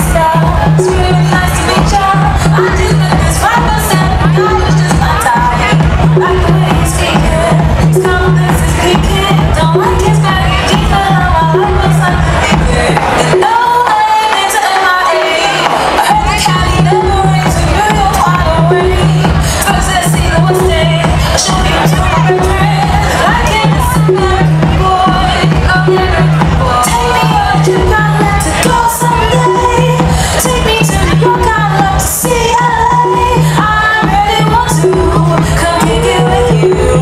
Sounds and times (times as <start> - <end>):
Music: 0.0 - 37.0.